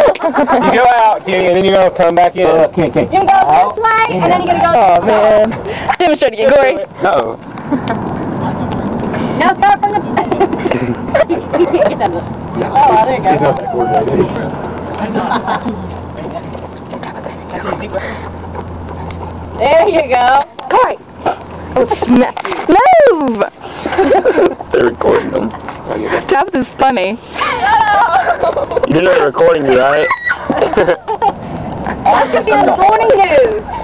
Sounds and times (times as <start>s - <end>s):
Outside, rural or natural: 0.0s - 33.8s
Run: 13.4s - 20.5s.